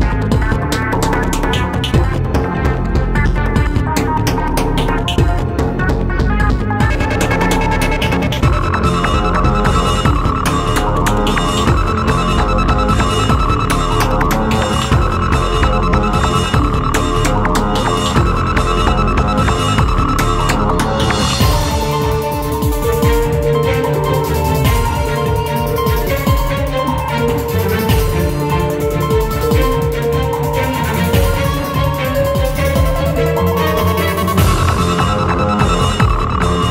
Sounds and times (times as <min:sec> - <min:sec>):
Music: 0:00.0 - 0:36.7.